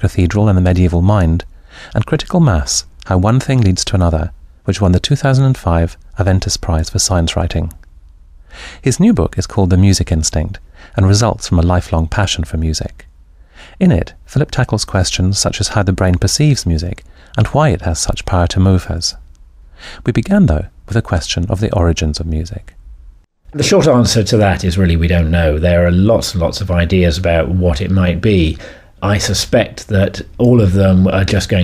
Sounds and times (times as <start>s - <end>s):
Speech: 0.0s - 7.8s, 8.8s - 13.1s, 13.8s - 19.2s, 20.0s - 22.8s, 23.6s - 31.6s.